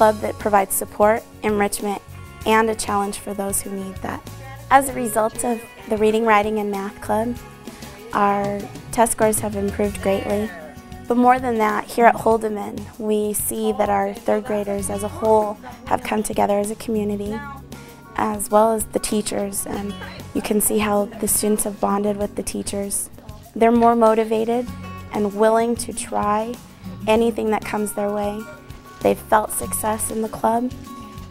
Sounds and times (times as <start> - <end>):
Speech: 0.0 - 7.4, 8.1 - 17.6, 18.2 - 30.7
Music: 0.0 - 31.3.